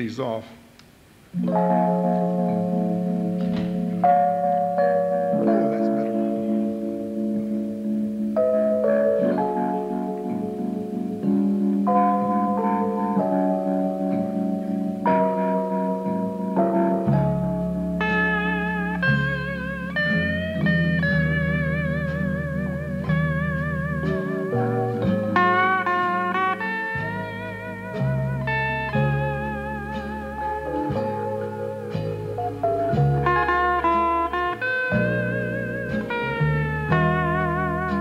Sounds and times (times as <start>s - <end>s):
Plucked string instrument: 1.4s - 38.0s.